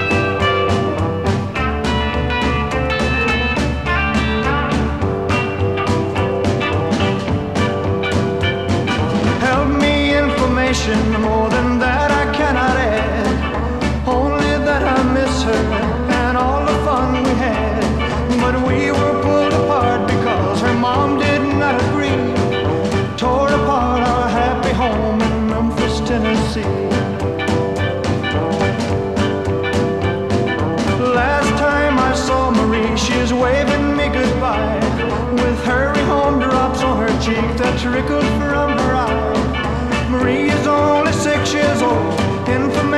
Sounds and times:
Rock and roll: 0.0 - 42.9.

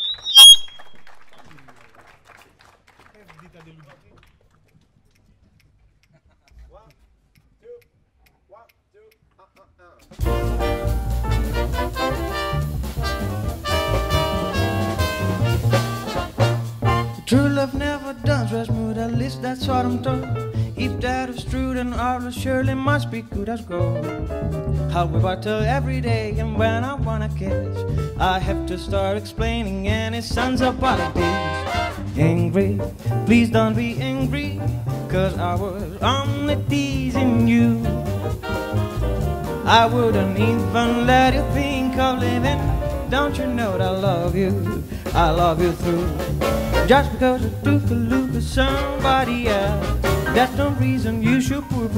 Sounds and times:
Jazz: 10.1 - 51.9.

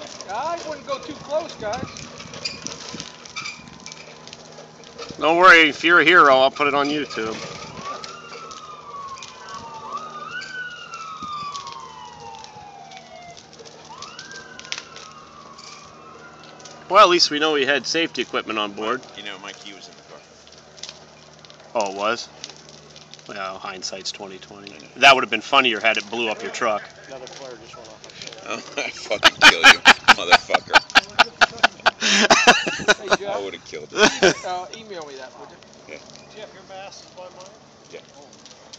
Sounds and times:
Fire: 0.0 - 38.7
Outside, urban or manmade: 0.0 - 38.7
Speech: 0.2 - 1.9, 23.3 - 31.8.

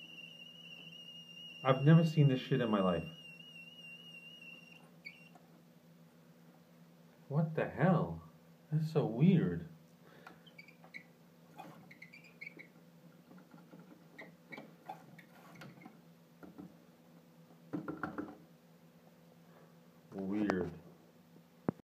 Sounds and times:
Speech: 1.7 - 3.1, 7.3 - 9.8, 20.1 - 20.8.

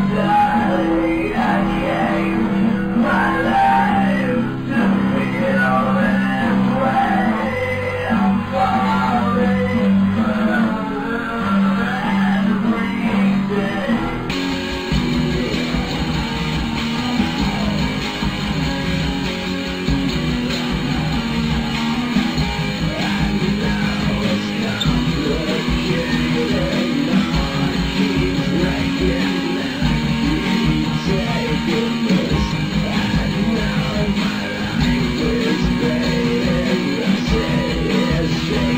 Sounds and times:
Music: 0.0 - 38.7.

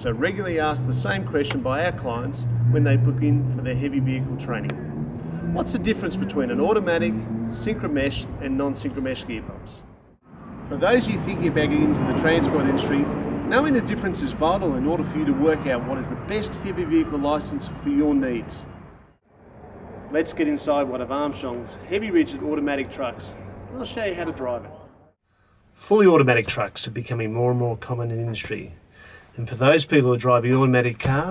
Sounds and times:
Speech: 0.0 - 4.7, 5.6 - 9.8, 10.7 - 18.7, 20.2 - 24.9, 25.8 - 28.8, 29.4 - 31.3.

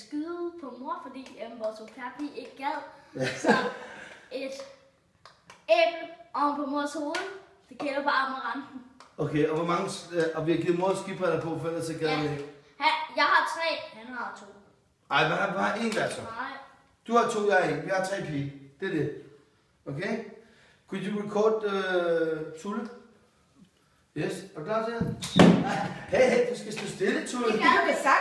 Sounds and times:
Speech: 26.1 - 28.2.

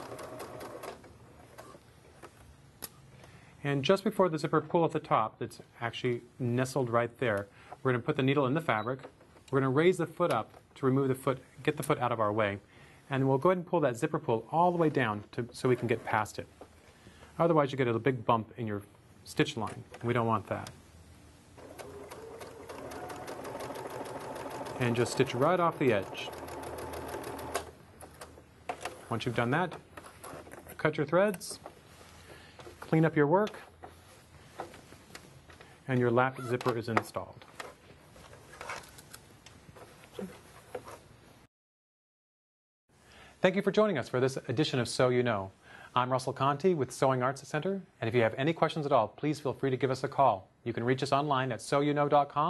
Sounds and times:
Sewing machine: 0.0 - 1.8, 21.6 - 27.7.

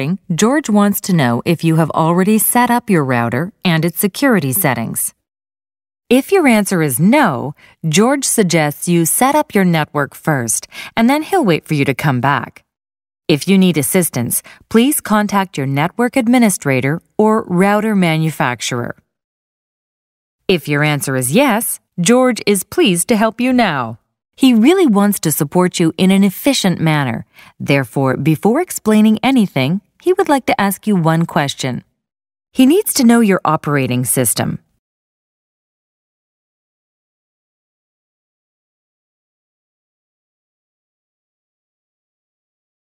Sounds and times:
Speech: 0.0 - 5.2, 6.1 - 12.6, 13.3 - 19.0, 20.5 - 31.9, 32.6 - 34.7.

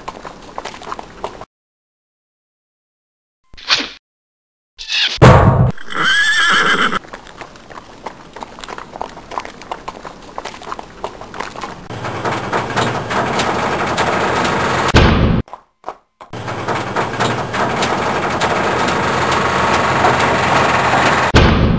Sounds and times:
Clip-clop: 0.0 - 1.5, 6.7 - 11.9.

